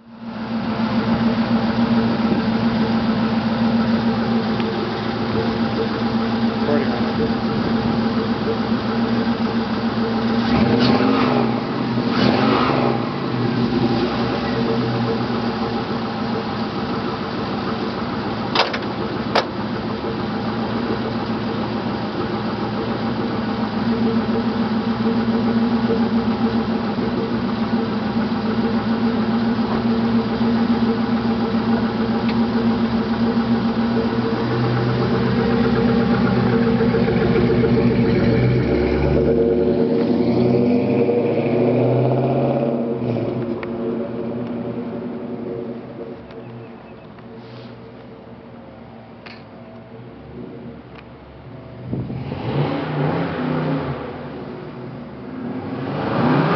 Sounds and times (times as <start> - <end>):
Car: 0.0 - 56.5
Outside, rural or natural: 0.0 - 56.5.